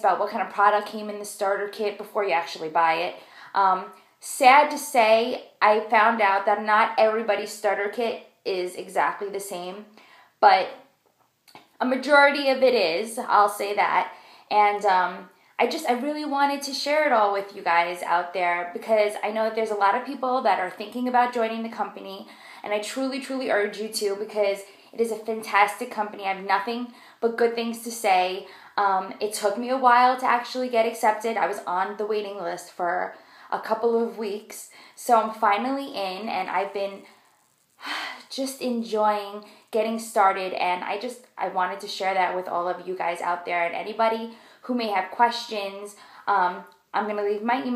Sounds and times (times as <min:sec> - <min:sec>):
Speech: 0:00.0 - 0:10.8, 0:11.8 - 0:37.0, 0:37.9 - 0:47.7.